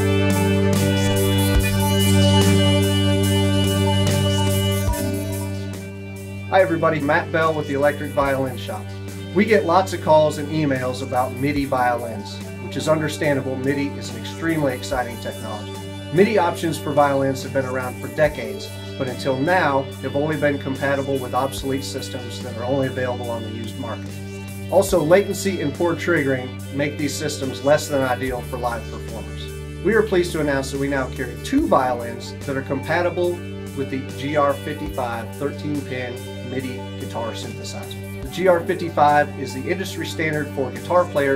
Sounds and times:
Speech: 0.8 - 1.4, 6.5 - 41.3
Violin, fiddle: 6.7 - 41.3.

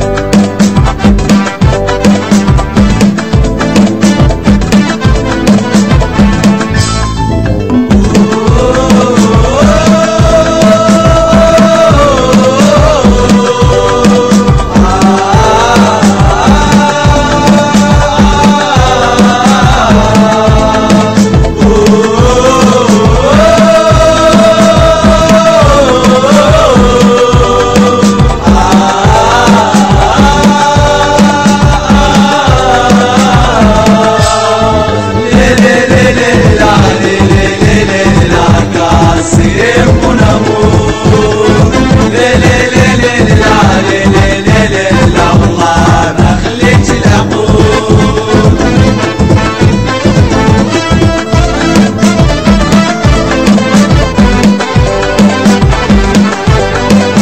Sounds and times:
Music: 0.0 - 57.2.

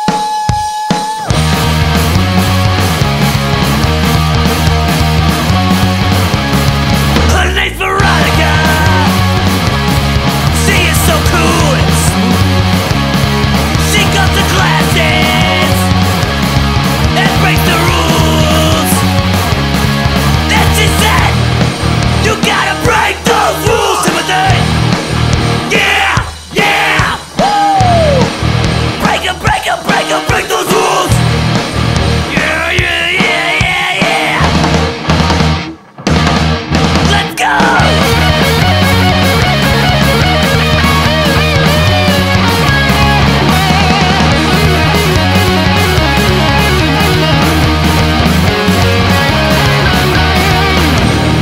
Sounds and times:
Music: 0.0 - 51.4.

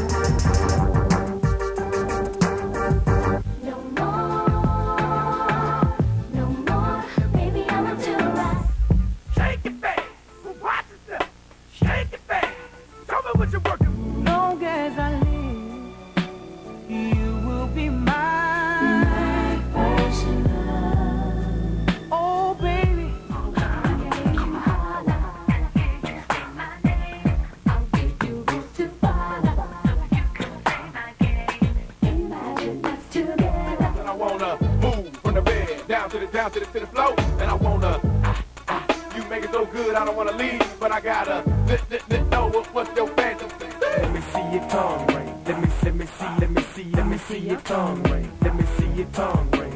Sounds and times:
Dance music: 0.0 - 10.2, 11.8 - 49.7.

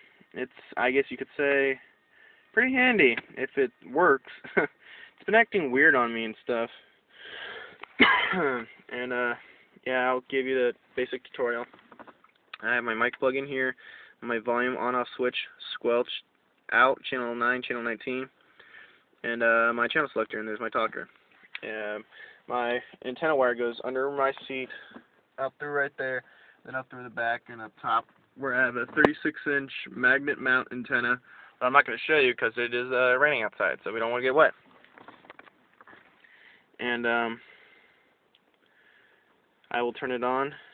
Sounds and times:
Speech: 0.4 - 1.8, 2.6 - 4.5, 5.2 - 6.9, 8.4 - 11.7, 12.6 - 18.3, 19.2 - 34.6, 36.8 - 37.4, 39.7 - 40.7.

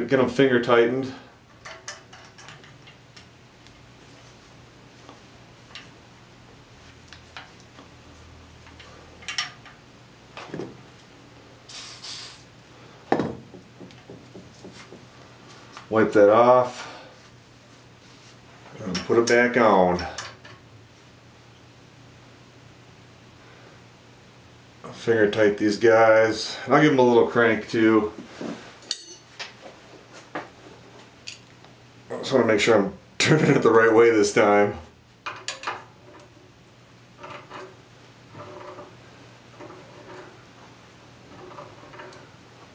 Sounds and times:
Speech: 0.0 - 1.3, 15.9 - 16.9, 18.7 - 20.2, 24.9 - 28.2, 32.1 - 34.9.

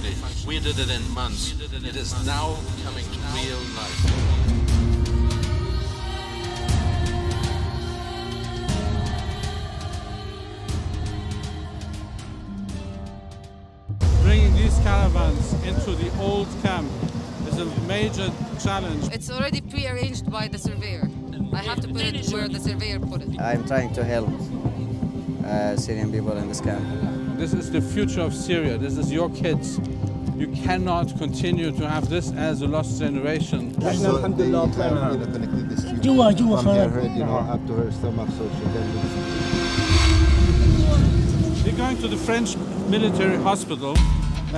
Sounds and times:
Music: 0.0 - 44.5
Speech: 17.5 - 24.5.

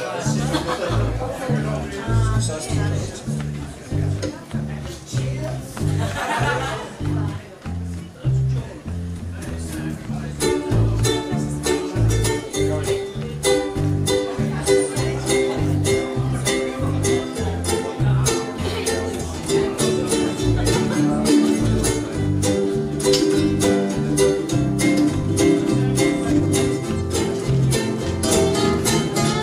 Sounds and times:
Music: 0.0 - 29.4
Speech: 0.0 - 29.4.

